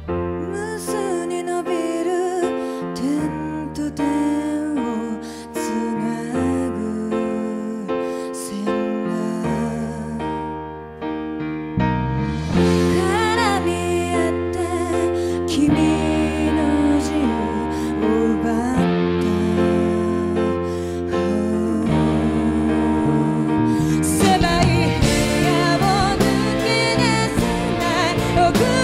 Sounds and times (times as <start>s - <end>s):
Tender music: 0.0s - 28.8s.